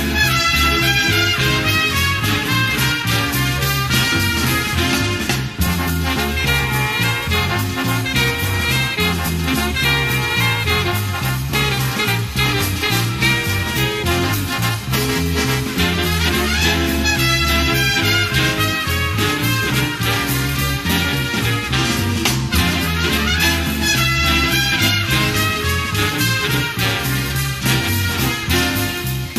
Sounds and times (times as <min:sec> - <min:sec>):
Exciting music: 0:00.0 - 0:29.3.